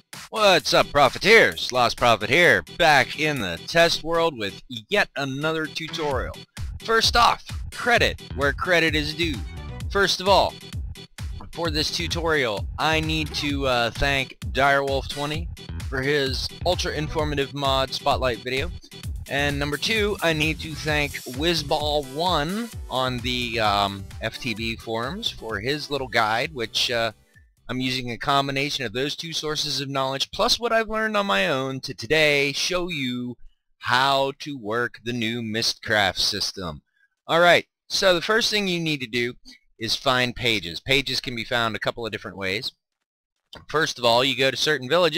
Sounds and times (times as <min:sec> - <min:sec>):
Narration, monologue: 0:00.0 - 0:42.8, 0:43.5 - 0:45.1.